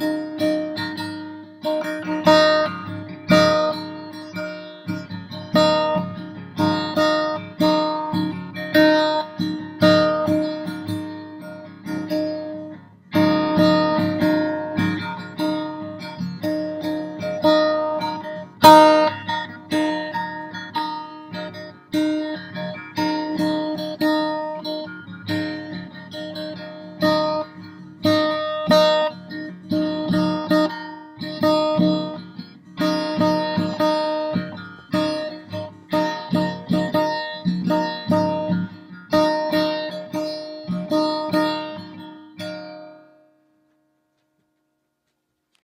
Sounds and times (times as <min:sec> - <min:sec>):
Zither: 0:00.0 - 0:43.4
Guitar: 0:00.0 - 0:45.6.